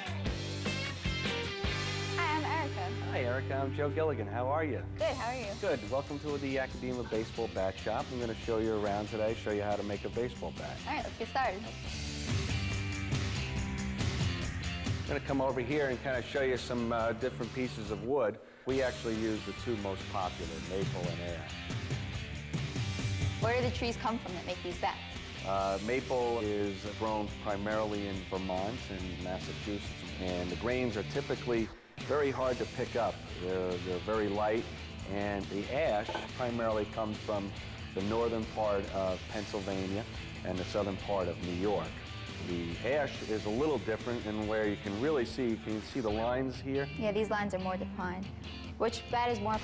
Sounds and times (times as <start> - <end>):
Music: 0.0 - 49.6
Speech: 2.4 - 11.6, 15.1 - 21.4, 23.4 - 48.2.